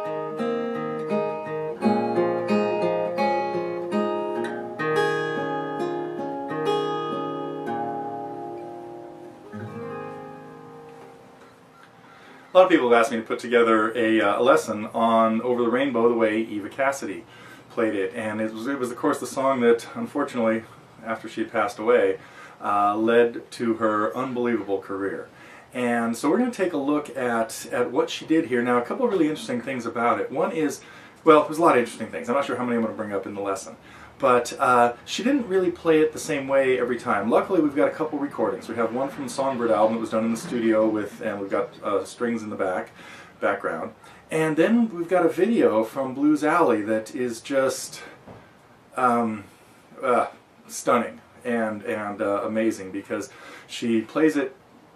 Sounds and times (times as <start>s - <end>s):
Speech: 12.6s - 48.2s, 49.0s - 54.6s.